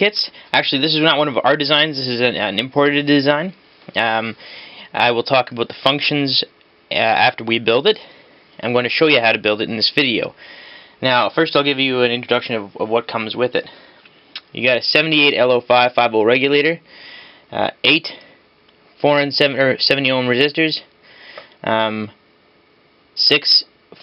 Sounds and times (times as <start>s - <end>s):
Speech: 0.0s - 10.4s, 11.0s - 13.8s, 14.4s - 16.8s, 17.5s - 18.3s, 19.0s - 20.9s, 21.6s - 22.2s, 23.2s - 24.0s
Inside, small room: 0.0s - 24.0s.